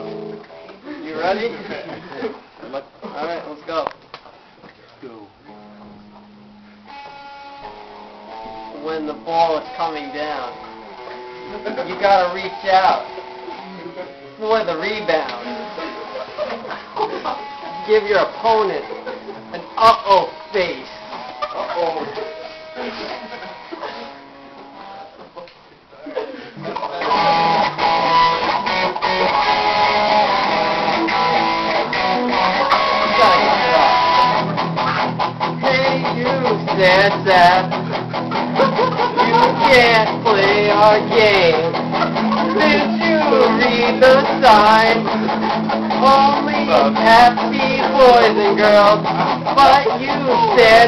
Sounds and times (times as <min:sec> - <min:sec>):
Music: 0:00.0 - 0:00.8, 0:05.5 - 0:25.2, 0:26.7 - 0:50.8.